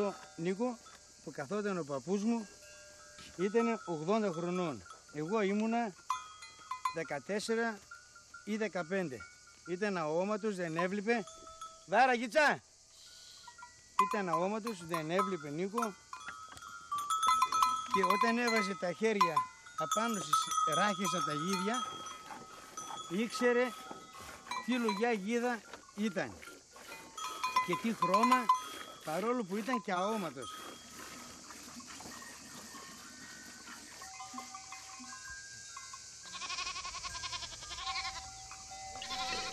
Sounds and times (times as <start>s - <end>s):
Speech: 0.0s - 2.5s, 7.0s - 7.8s, 14.0s - 16.0s, 18.0s - 21.9s, 23.1s - 23.8s, 24.6s - 26.4s, 29.1s - 30.5s.